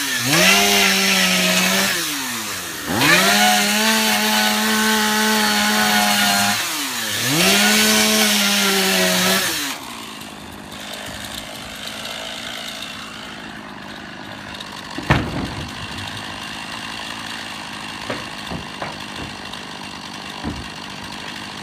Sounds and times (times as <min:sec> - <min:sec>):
Chainsaw: 0:00.0 - 0:21.6.